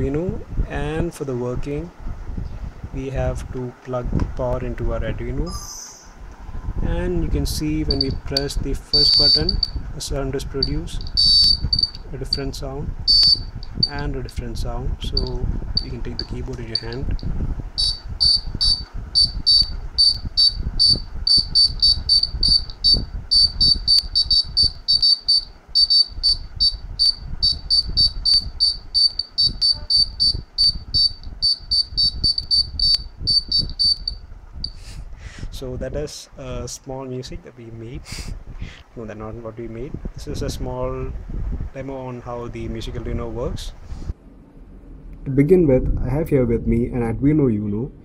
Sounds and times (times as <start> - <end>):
Speech: 0.0 - 2.0, 3.0 - 6.0, 6.8 - 11.0, 12.1 - 12.9, 13.9 - 17.1, 35.5 - 38.1, 39.0 - 43.8, 45.2 - 48.0
Buzzer: 7.9 - 9.8, 10.6 - 12.4, 13.1 - 13.9, 15.2 - 17.1, 17.8 - 34.8.